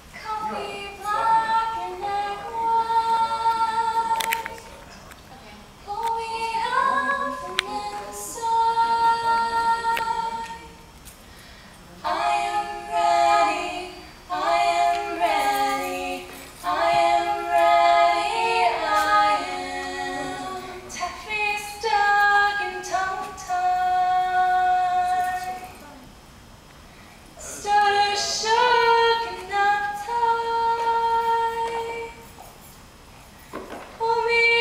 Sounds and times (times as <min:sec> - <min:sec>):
Vocal music: 0:00.0 - 0:05.2, 0:05.8 - 0:26.2, 0:27.3 - 0:32.4.